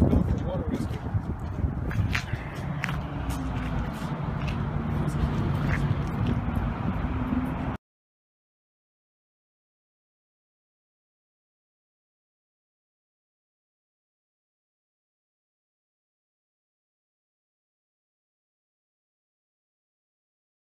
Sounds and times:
Outside, urban or manmade: 0.0s - 7.8s.

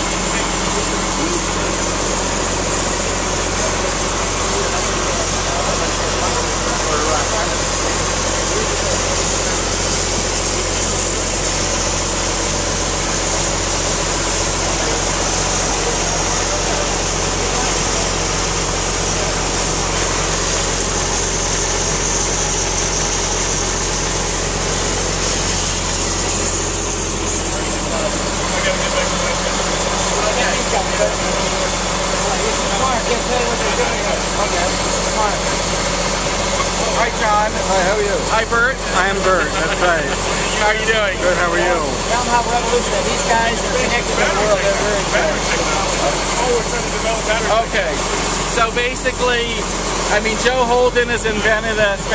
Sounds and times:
Pump (liquid): 0.0s - 52.1s
Water: 0.0s - 52.1s.

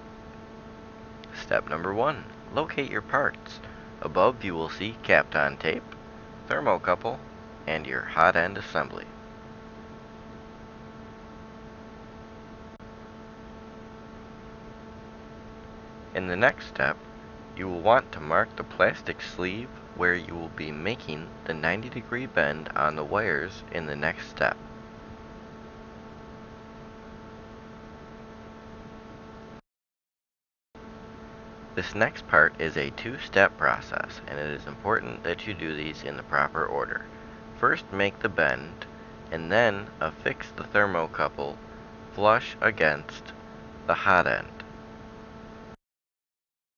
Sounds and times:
Speech: 1.4s - 5.9s, 6.5s - 9.2s, 16.2s - 17.0s, 17.6s - 24.6s, 31.8s - 41.6s, 42.2s - 44.6s.

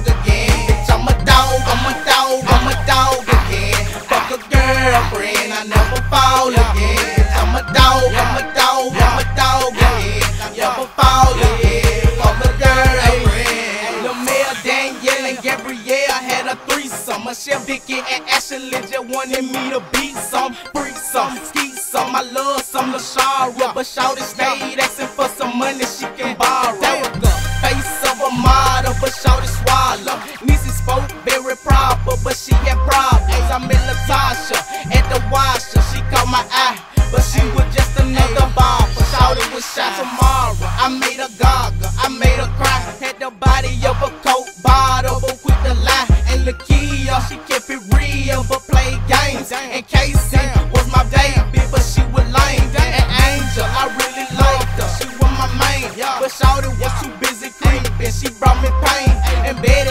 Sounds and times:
Music: 0.0s - 59.9s.

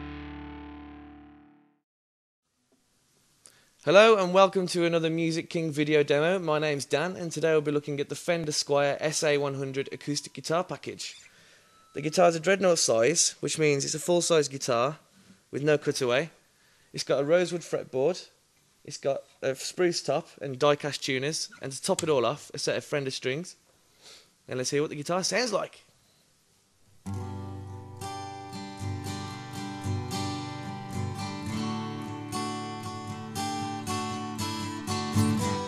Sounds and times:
Speech: 3.9s - 11.2s, 12.0s - 16.4s, 17.0s - 23.6s, 24.5s - 25.9s.

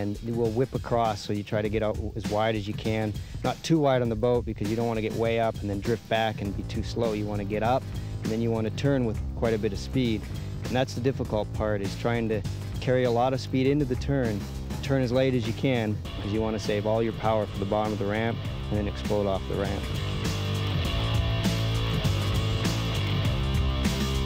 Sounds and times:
Speech: 0.0s - 19.9s
Music: 0.0s - 24.2s.

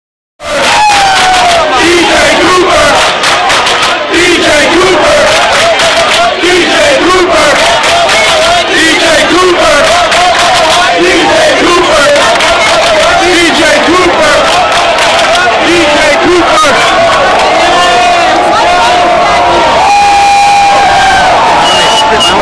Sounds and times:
Crowd: 0.4s - 22.4s
Speech: 15.4s - 16.9s, 21.6s - 22.4s.

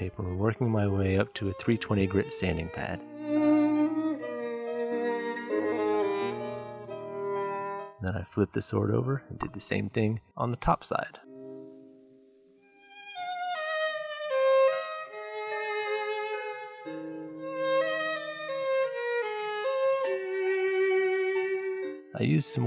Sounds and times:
Wind instrument, woodwind instrument: 0.0s - 9.6s, 19.7s - 22.6s.

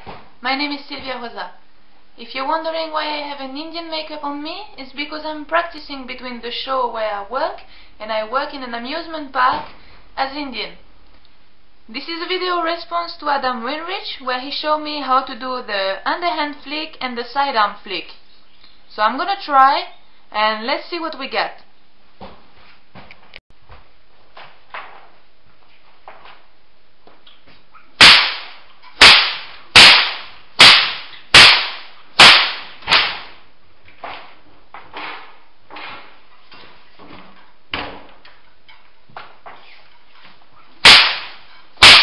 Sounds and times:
Whip: 28.0s - 33.4s, 40.8s - 42.0s.

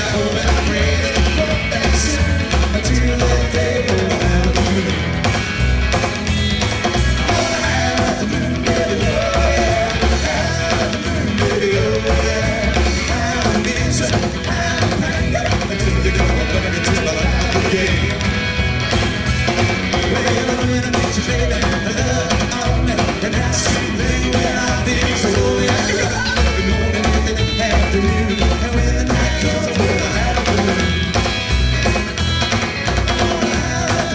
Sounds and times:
Country: 0.0s - 34.1s
Rock music: 0.0s - 34.1s
Ska: 0.0s - 34.1s.

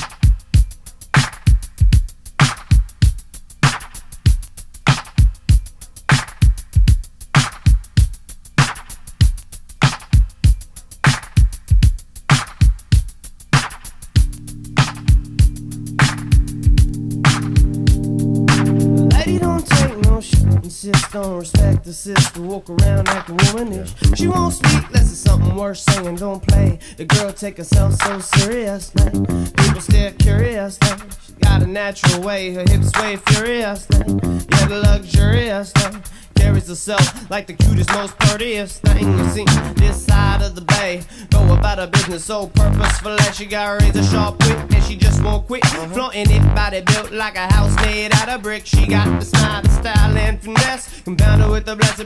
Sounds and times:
Funk: 0.0s - 52.0s.

